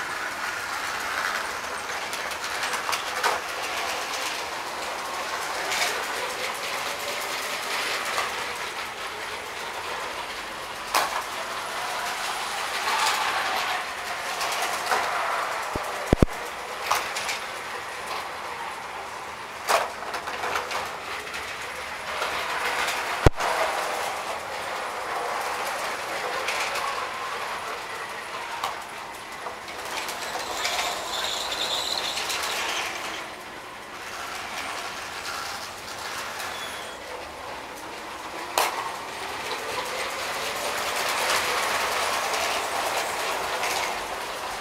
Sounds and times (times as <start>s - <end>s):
Engine: 0.0s - 44.6s.